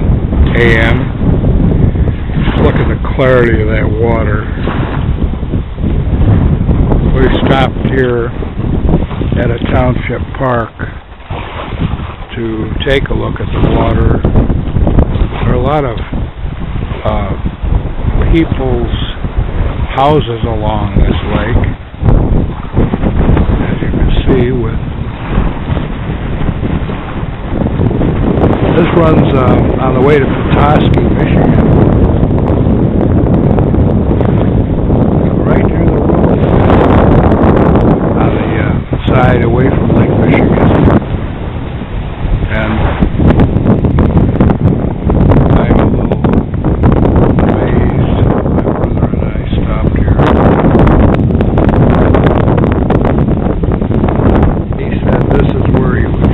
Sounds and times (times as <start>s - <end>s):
Speech: 0.5s - 1.1s, 2.5s - 4.5s, 7.2s - 8.4s, 9.4s - 11.0s, 12.3s - 14.2s, 15.4s - 16.1s, 17.0s - 17.4s, 18.3s - 19.2s, 19.9s - 21.8s, 23.6s - 24.8s, 28.7s - 31.6s, 35.4s - 36.0s, 38.2s - 40.8s, 42.5s - 43.0s, 45.6s - 46.2s, 47.6s - 48.3s, 48.9s - 50.2s, 54.8s - 56.2s.